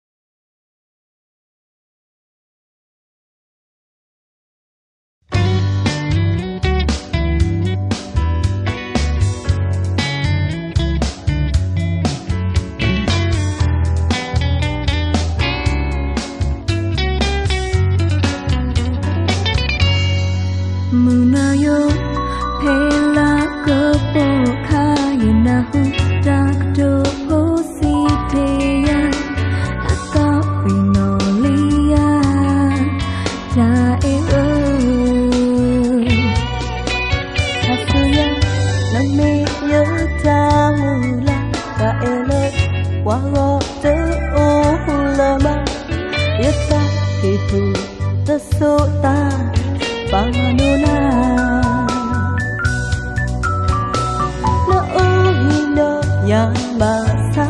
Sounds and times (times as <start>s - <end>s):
Music: 5.3s - 57.4s.